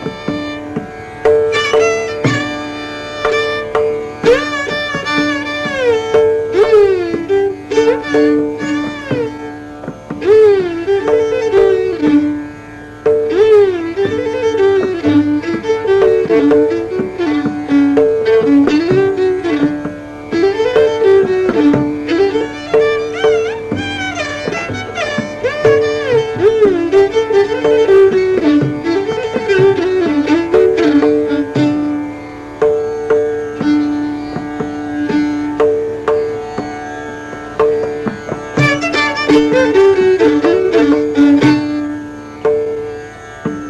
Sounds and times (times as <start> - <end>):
Violin, fiddle: 0.0 - 43.6.